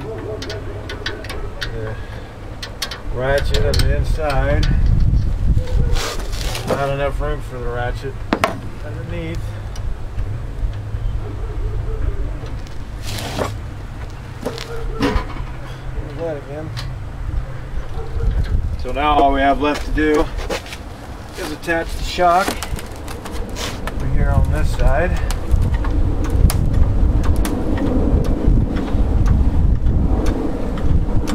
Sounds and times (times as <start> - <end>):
Speech: 3.1 - 4.8, 6.7 - 8.2, 8.8 - 9.6, 16.0 - 16.8, 18.8 - 20.3, 21.4 - 22.6, 24.0 - 25.3.